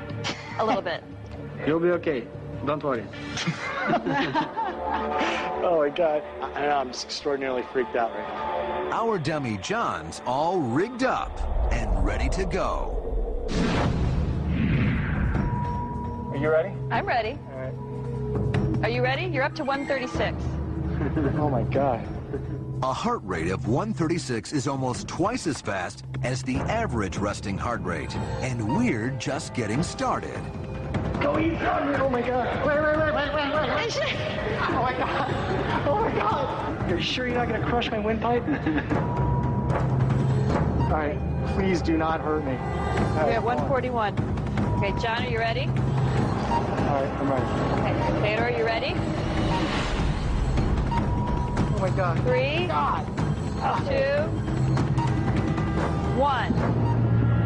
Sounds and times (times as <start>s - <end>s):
Music: 0.0s - 57.4s.